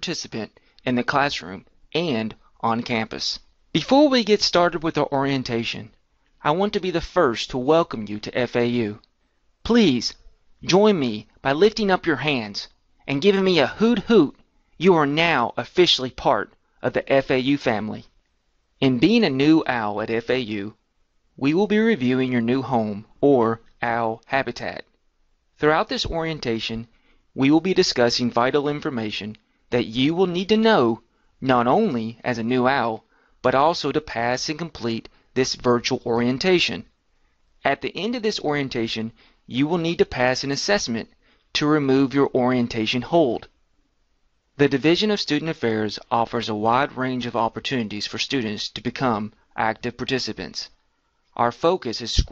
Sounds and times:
Speech: 0.0 - 18.2, 18.8 - 20.8, 21.4 - 25.0, 25.6 - 37.0, 37.6 - 43.6, 44.6 - 50.8, 51.4 - 52.3.

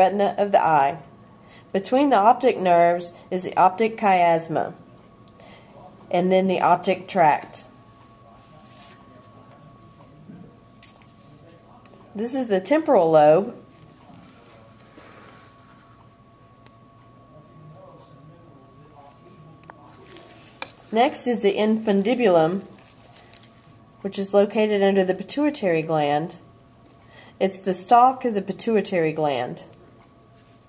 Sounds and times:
Speech: 0.0 - 1.1, 1.7 - 15.0, 17.3 - 22.8, 24.0 - 26.5, 27.4 - 30.0.

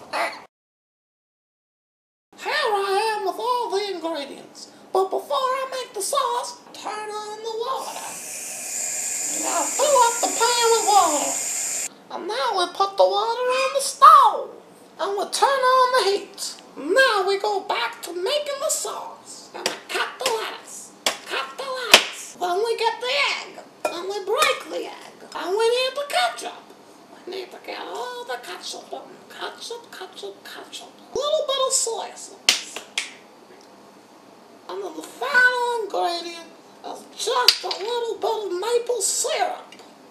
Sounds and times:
Speech: 2.4 - 8.2, 9.3 - 11.4, 12.1 - 32.9, 34.7 - 39.8.

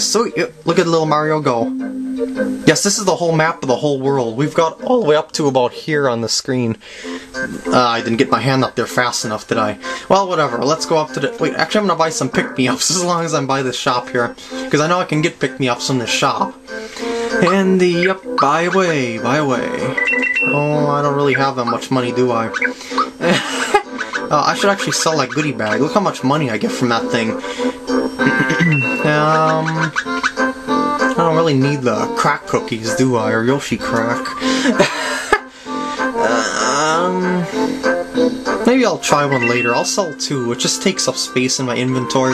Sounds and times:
Speech: 0.0 - 1.7, 2.7 - 6.8, 7.6 - 16.6, 17.4 - 22.6, 24.3 - 27.4, 28.8 - 30.0, 31.1 - 34.4, 36.2 - 37.5, 38.7 - 42.3
Music: 0.0 - 42.3.

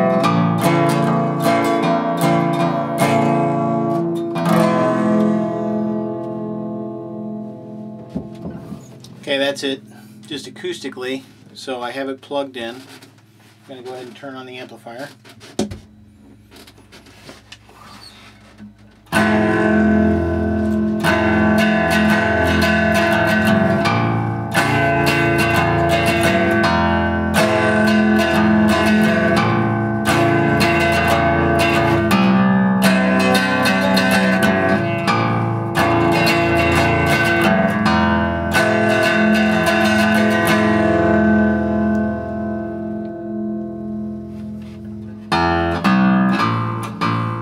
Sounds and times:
Bass guitar: 0.0 - 12.9, 13.5 - 47.4
Inside, small room: 0.0 - 47.4
Strum: 0.0 - 47.4
Speech: 9.2 - 12.9, 13.6 - 15.2.

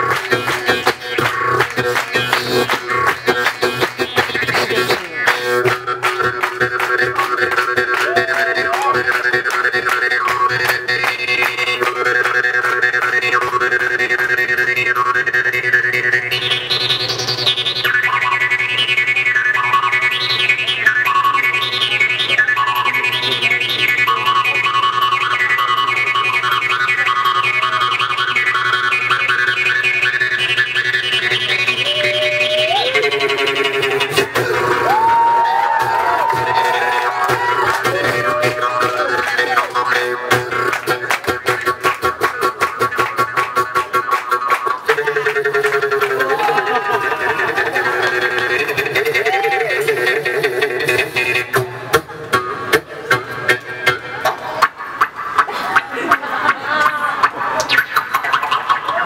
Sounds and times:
Music: 0.0 - 59.0.

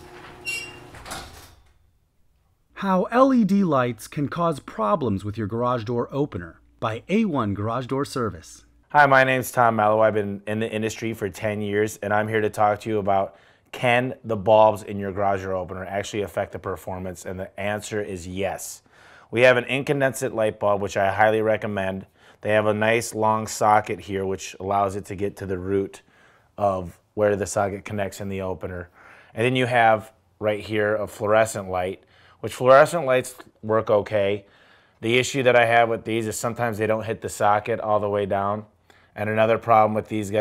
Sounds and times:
Speech: 2.8 - 26.0, 26.6 - 40.4.

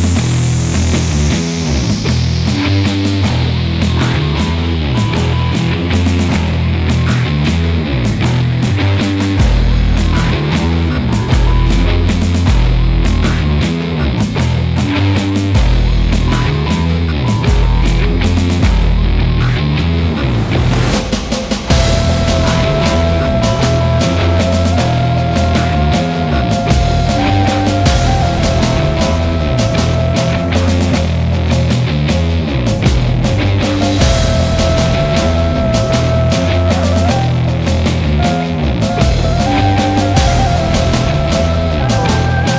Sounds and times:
Music: 0.0 - 42.5.

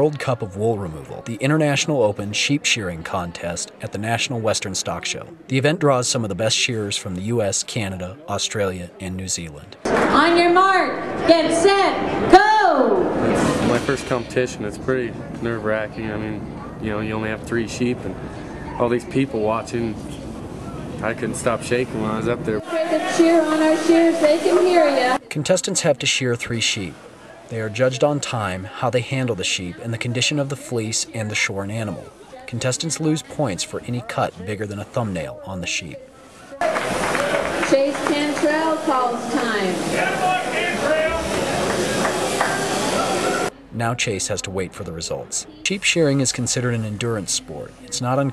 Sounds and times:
Speech: 0.0 - 18.2, 21.0 - 36.1, 43.8 - 48.3.

